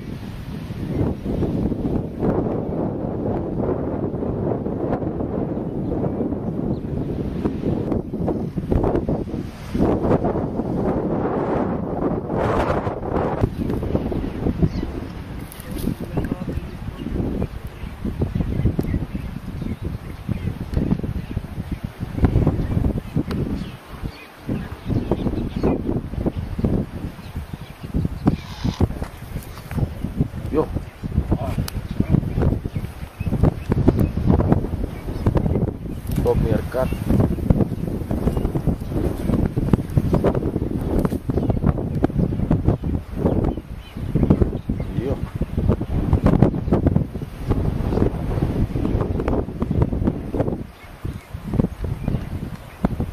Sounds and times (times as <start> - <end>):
Outside, rural or natural: 0.0 - 53.1.